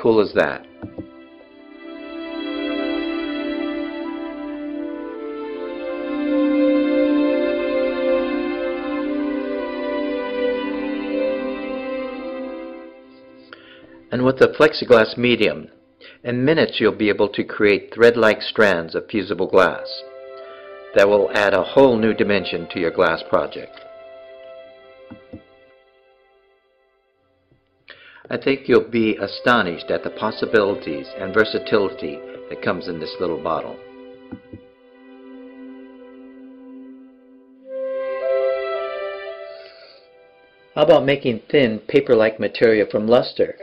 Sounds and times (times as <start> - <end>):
Speech: 0.0 - 0.7, 14.1 - 20.1, 21.0 - 23.8, 28.3 - 33.8, 40.8 - 43.6
Music: 0.0 - 43.6.